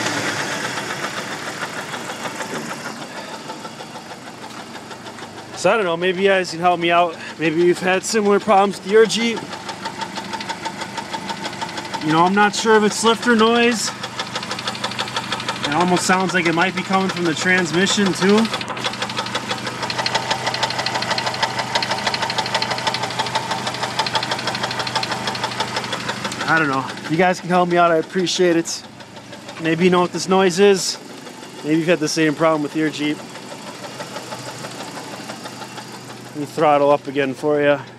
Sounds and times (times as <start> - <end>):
Car: 0.0 - 37.9
Engine: 0.0 - 37.9
Speech: 5.6 - 9.4, 12.0 - 14.0, 15.6 - 18.5, 26.4 - 28.9, 29.6 - 31.0, 31.6 - 33.2, 36.4 - 37.9.